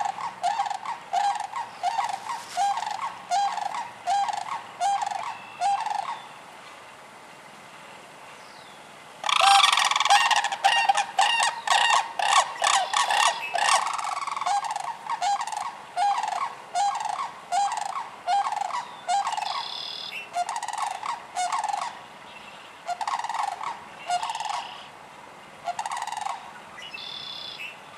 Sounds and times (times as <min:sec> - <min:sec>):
Bird: 0:00.0 - 0:06.4, 0:08.4 - 0:24.9, 0:25.7 - 0:27.8.